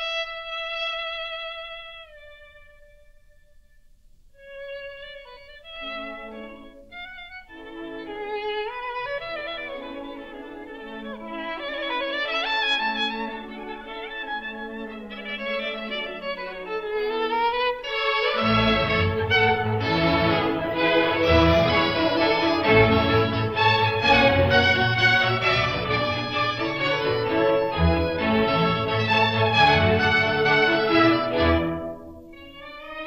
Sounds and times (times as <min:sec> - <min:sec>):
Violin, fiddle: 0:00.0 - 0:03.3, 0:04.4 - 0:33.0.